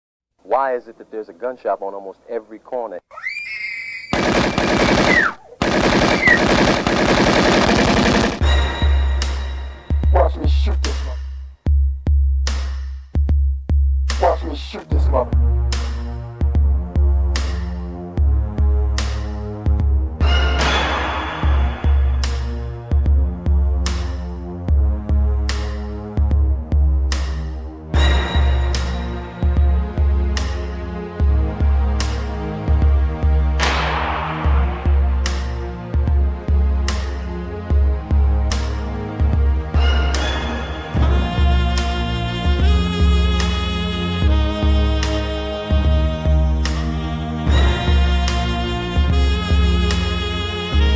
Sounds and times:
Speech: 0.4 - 3.0, 10.1 - 11.2, 14.1 - 15.4
Music: 7.8 - 50.9.

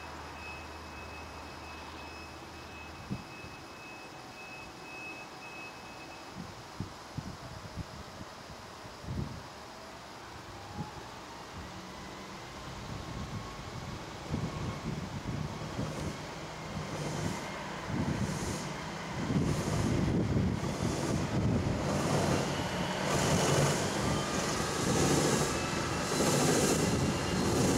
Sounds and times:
Truck: 0.0 - 8.2, 8.8 - 27.7.

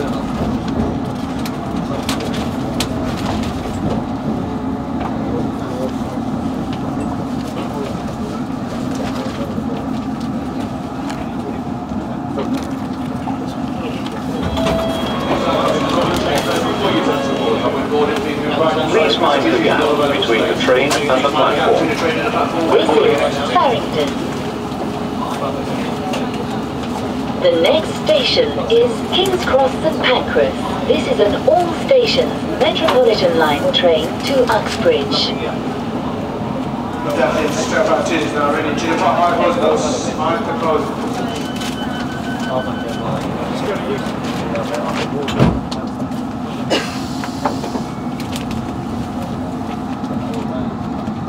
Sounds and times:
Speech: 15.3 - 24.3, 27.4 - 35.6, 37.0 - 41.3.

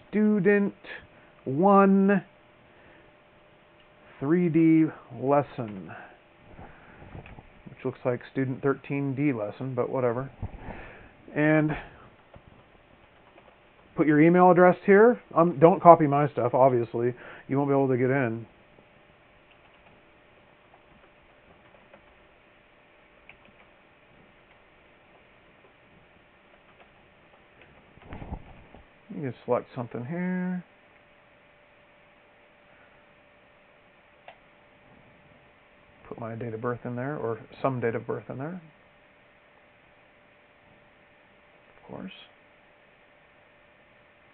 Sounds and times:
Speech: 0.0 - 2.3, 4.2 - 6.1, 7.7 - 10.3, 11.3 - 12.0, 14.0 - 18.5, 29.1 - 30.7, 36.0 - 38.8, 41.8 - 42.4.

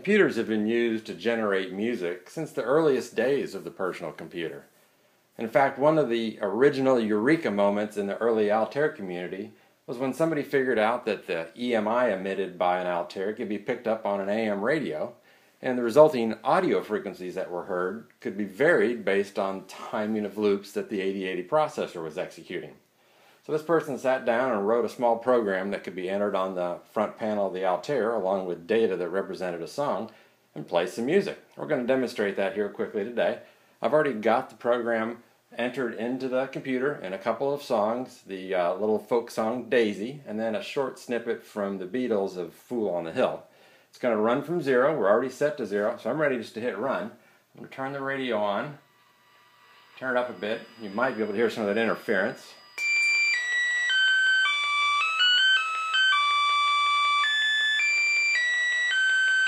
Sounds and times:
Speech: 0.0 - 4.7, 5.4 - 22.8, 23.4 - 48.8, 50.0 - 52.6.

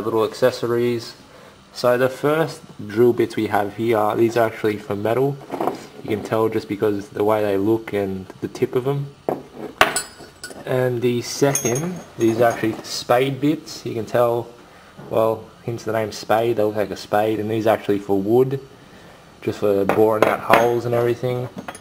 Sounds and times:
Speech: 0.0 - 9.2, 10.6 - 18.7, 19.4 - 21.6.

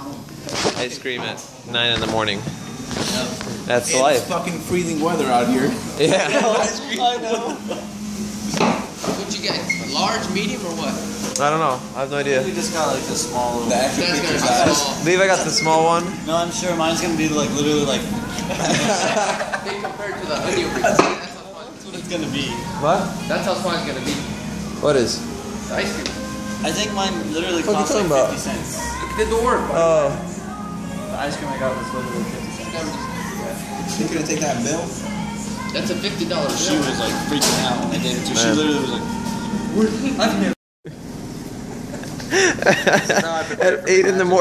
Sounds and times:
Inside, public space: 0.0 - 44.4.

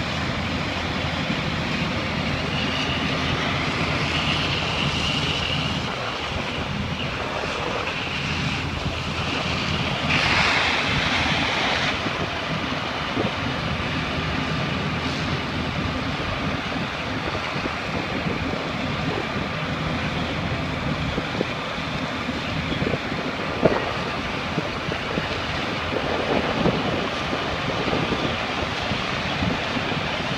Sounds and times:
Crackle: 0.0 - 12.5.

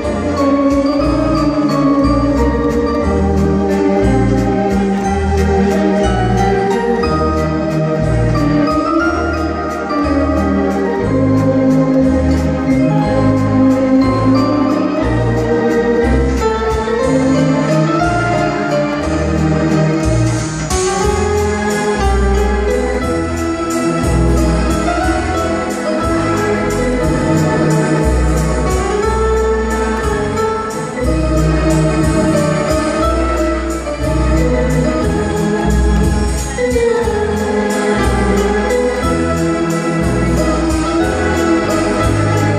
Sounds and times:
Keyboard (musical): 0.0 - 42.5.

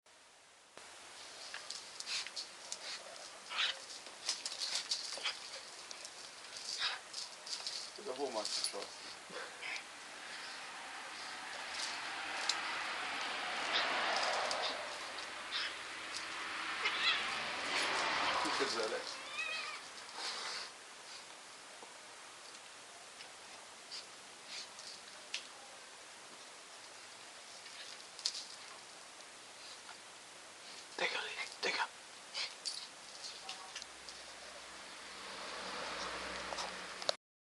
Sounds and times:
Speech: 8.0 - 8.9, 18.5 - 19.1, 31.0 - 31.9.

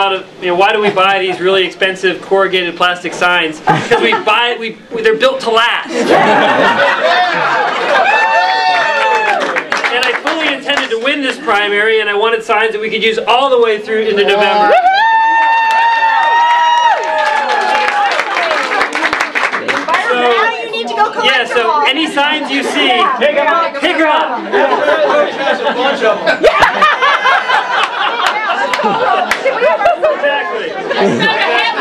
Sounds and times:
Male speech, man speaking: 0.0 - 6.1, 9.8 - 14.7, 20.0 - 26.3, 30.0 - 31.2
Conversation: 0.0 - 31.8
Female speech, woman speaking: 18.4 - 21.9.

